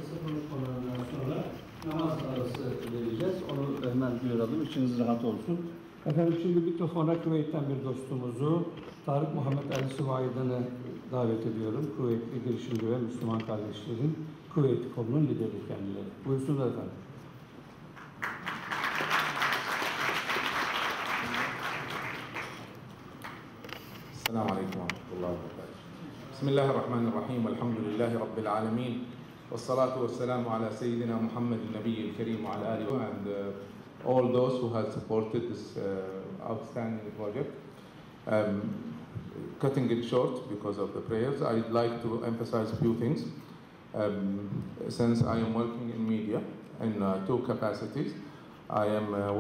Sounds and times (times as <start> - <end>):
Male speech, man speaking: 0.0 - 17.0, 24.2 - 37.6, 38.3 - 38.8, 39.4 - 43.4, 44.0 - 49.4
Narration, monologue: 0.0 - 18.0, 22.7 - 49.4.